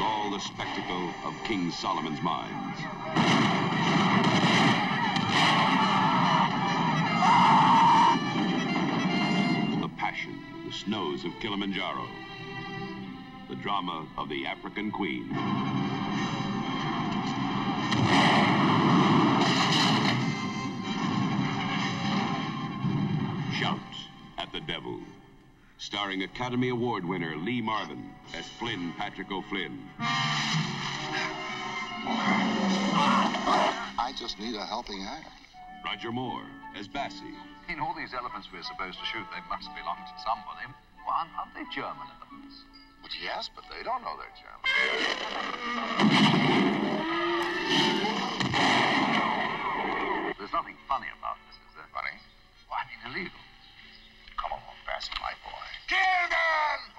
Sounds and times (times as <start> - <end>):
Speech: 0.0 - 2.8, 9.8 - 12.1, 13.5 - 15.3, 23.5 - 25.1, 25.8 - 29.8
Music: 0.0 - 56.9
Whoop: 7.2 - 8.2.